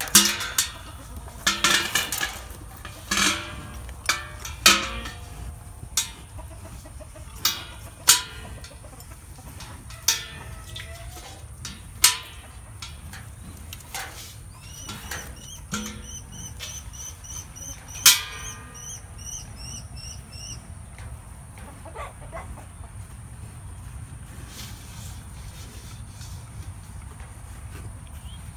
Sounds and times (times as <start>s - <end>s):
Livestock, farm animals, working animals: 0.0s - 28.5s.